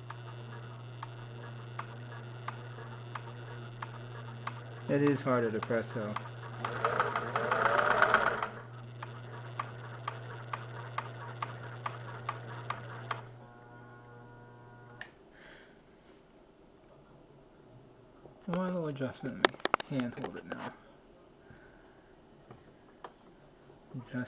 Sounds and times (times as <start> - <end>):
Sewing machine: 0.0 - 13.3.